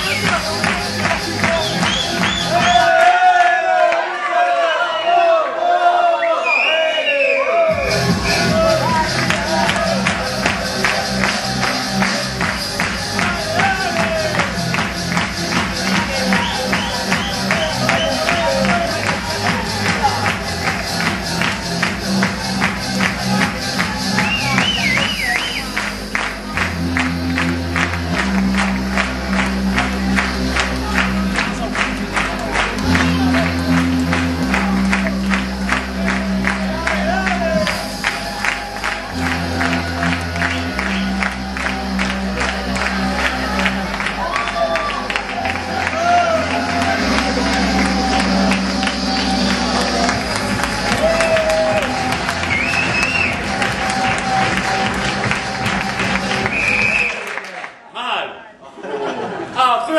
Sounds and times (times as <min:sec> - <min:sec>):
Music: 0:00.0 - 0:03.3, 0:07.6 - 0:57.4.